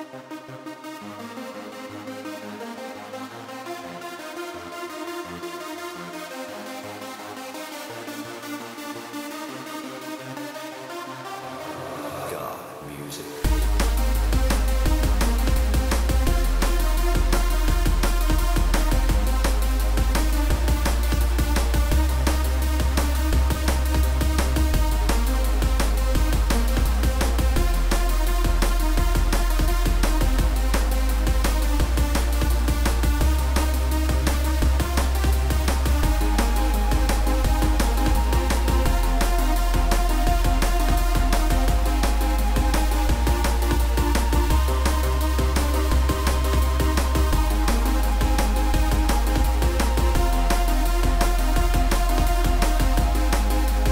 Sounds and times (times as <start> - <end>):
Background music: 0.0 - 53.9.